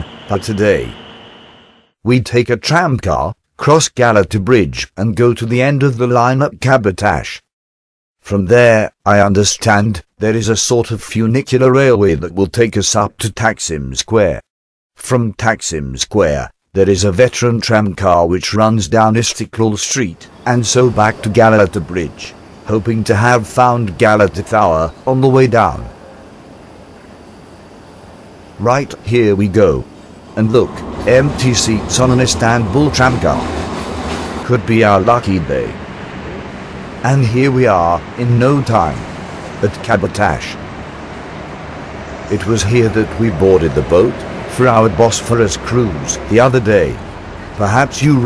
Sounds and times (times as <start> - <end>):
Speech: 0.0 - 1.0, 2.1 - 7.5, 8.2 - 25.9, 28.6 - 33.5, 34.4 - 35.8, 37.0 - 40.6, 42.3 - 47.0, 47.6 - 48.2.